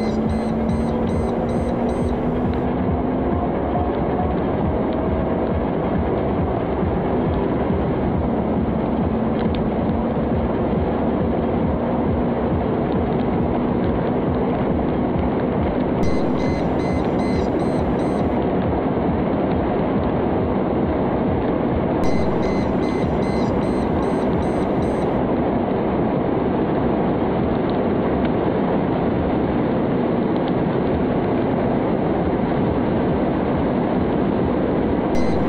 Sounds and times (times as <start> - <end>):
Vehicle: 0.0 - 35.4.